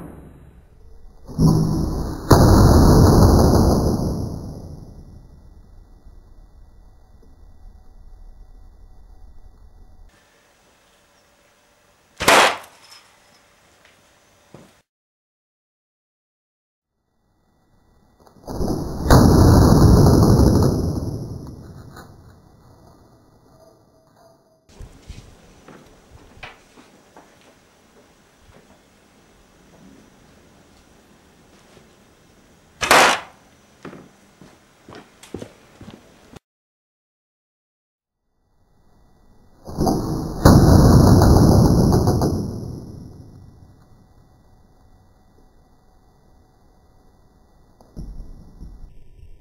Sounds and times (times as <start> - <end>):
Arrow: 0.0 - 0.7, 1.3 - 4.8, 12.2 - 13.0, 32.8 - 33.4, 39.7 - 43.4.